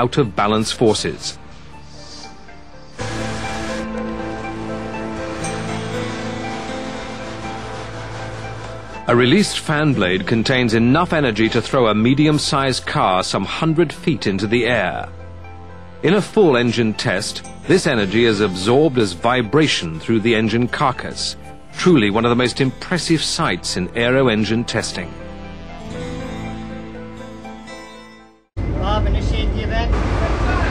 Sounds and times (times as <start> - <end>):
Speech: 0.0 - 1.4, 9.1 - 15.1, 16.0 - 25.1, 28.7 - 30.7
Music: 0.0 - 29.2.